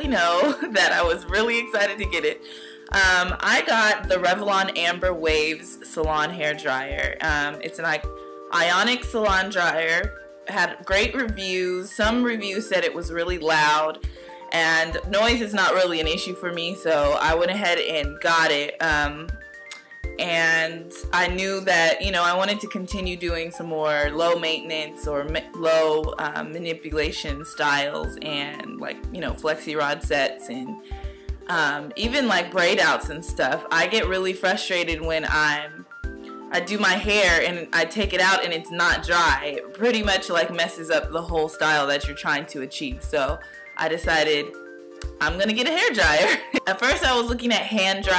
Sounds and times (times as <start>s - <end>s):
Speech: 0.0s - 19.3s, 20.2s - 30.8s, 31.5s - 35.8s, 36.5s - 44.5s, 45.1s - 48.1s
Music: 0.0s - 48.1s.